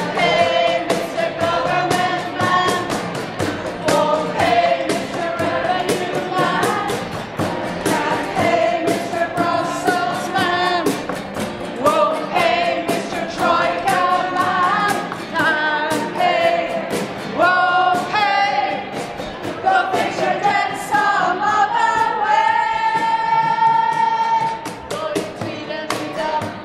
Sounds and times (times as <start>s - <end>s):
Music: 0.0s - 26.6s.